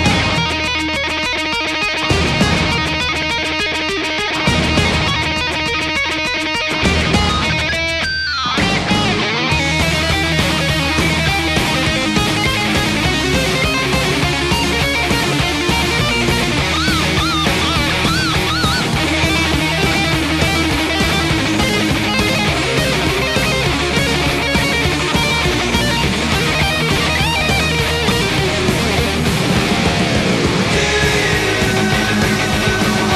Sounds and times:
Electric guitar: 0:00.0 - 0:33.1.

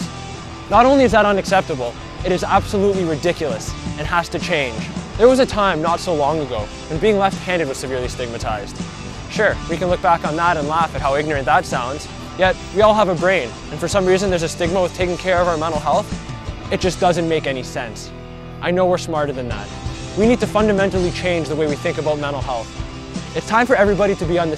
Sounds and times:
Music: 0:00.0 - 0:24.5
Speech: 0:00.7 - 0:24.5.

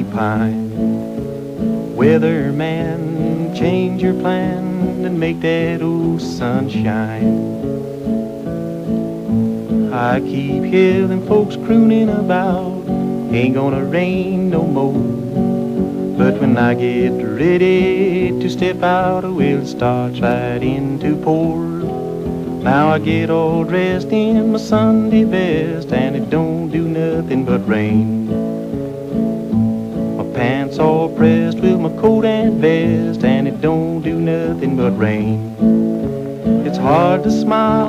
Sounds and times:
Music: 0:00.0 - 0:37.8.

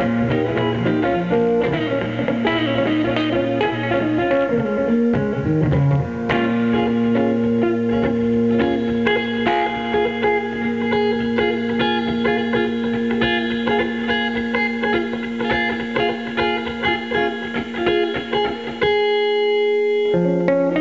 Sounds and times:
Guitar: 0:00.0 - 0:20.8.

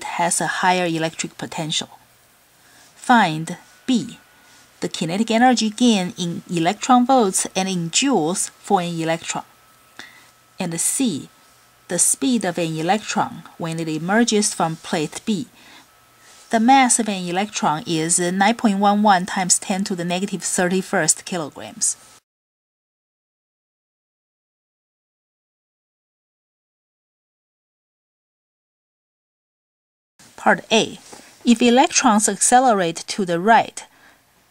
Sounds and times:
Speech: 0:00.0 - 0:02.0, 0:03.0 - 0:04.2, 0:04.8 - 0:09.5, 0:10.6 - 0:11.3, 0:11.9 - 0:15.5, 0:16.5 - 0:22.0, 0:30.4 - 0:33.9.

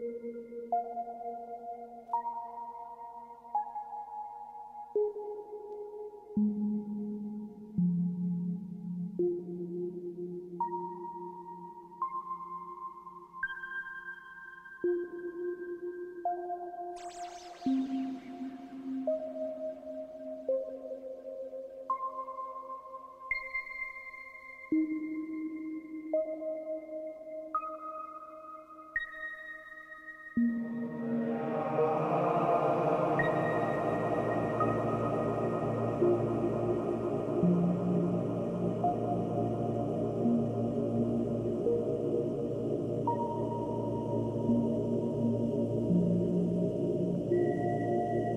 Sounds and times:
Music: 0:00.0 - 0:48.3.

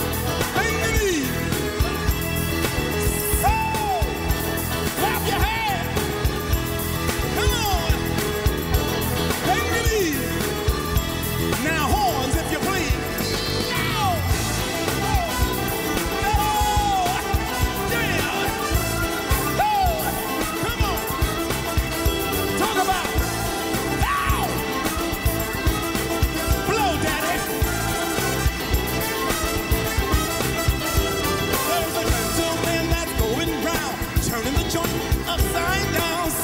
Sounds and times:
Music: 0:00.0 - 0:36.4
Speech: 0:00.5 - 0:01.6, 0:05.0 - 0:06.0, 0:07.4 - 0:08.0, 0:09.4 - 0:10.5, 0:11.6 - 0:14.4, 0:16.2 - 0:18.7, 0:22.6 - 0:23.2, 0:26.7 - 0:27.5.

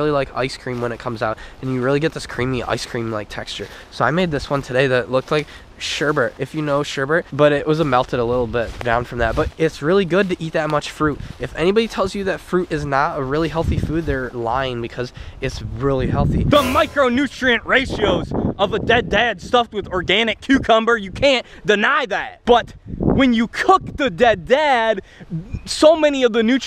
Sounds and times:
Speech: 0:00.0 - 0:26.6.

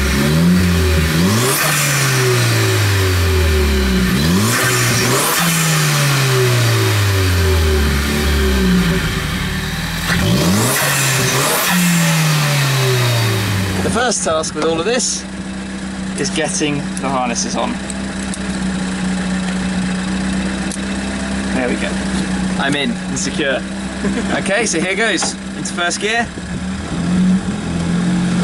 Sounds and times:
Car: 0:00.0 - 0:28.4
Medium engine (mid frequency): 0:00.0 - 0:28.4
Outside, urban or manmade: 0:00.0 - 0:28.4
Speech: 0:13.8 - 0:15.3, 0:16.2 - 0:17.8, 0:21.5 - 0:22.0, 0:22.6 - 0:26.4.

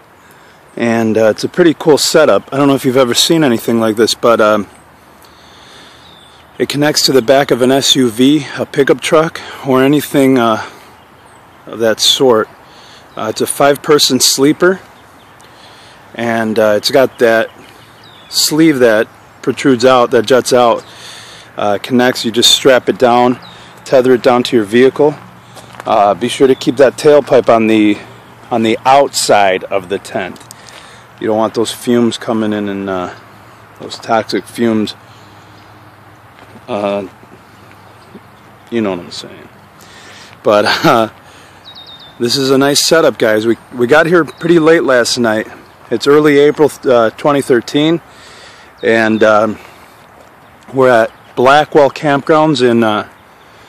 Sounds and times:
Speech: 0:00.8 - 0:04.7, 0:06.6 - 0:10.8, 0:11.7 - 0:12.5, 0:13.2 - 0:14.8, 0:16.1 - 0:17.6, 0:18.3 - 0:20.9, 0:21.6 - 0:25.2, 0:25.8 - 0:30.4, 0:31.2 - 0:33.2, 0:33.8 - 0:35.0, 0:36.6 - 0:37.2, 0:38.7 - 0:39.5, 0:40.4 - 0:41.2, 0:42.2 - 0:48.0, 0:48.8 - 0:49.7, 0:50.7 - 0:53.1.

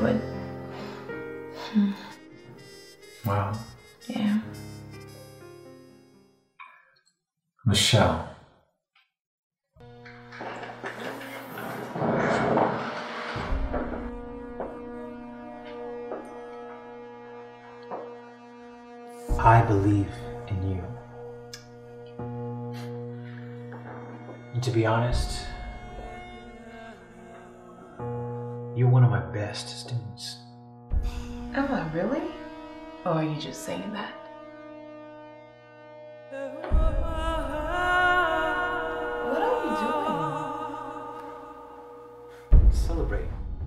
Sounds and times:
Music: 0:00.0 - 0:08.0, 0:09.8 - 0:43.6
Speech: 0:07.7 - 0:08.3.

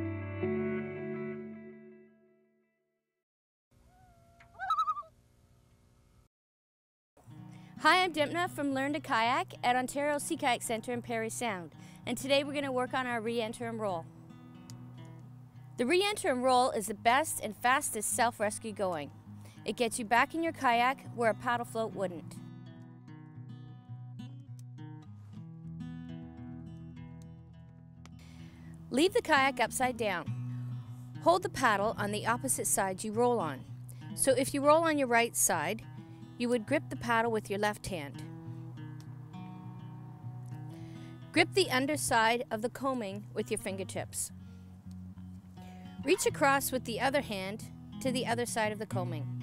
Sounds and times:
Music: 0:00.0 - 0:03.0, 0:07.2 - 0:49.4
Speech: 0:07.8 - 0:14.0, 0:15.8 - 0:19.1, 0:19.7 - 0:22.4, 0:28.9 - 0:30.3, 0:31.2 - 0:33.6, 0:34.2 - 0:35.8, 0:36.4 - 0:38.2, 0:41.4 - 0:44.3, 0:46.1 - 0:49.3.

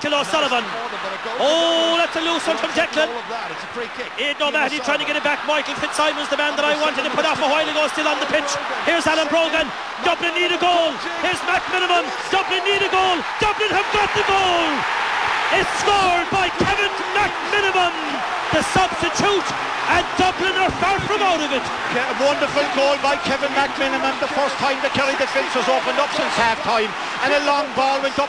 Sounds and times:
Speech: 0:00.0 - 0:14.8, 0:15.5 - 0:28.2.

